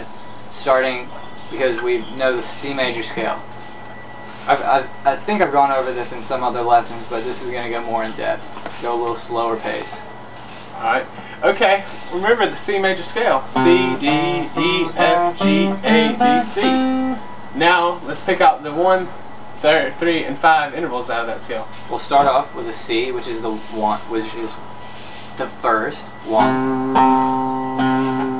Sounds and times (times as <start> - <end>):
Speech: 0.0 - 3.4, 4.5 - 10.0, 10.8 - 14.2, 17.6 - 24.6, 25.4 - 26.6
Acoustic guitar: 13.5 - 17.2, 26.2 - 28.3.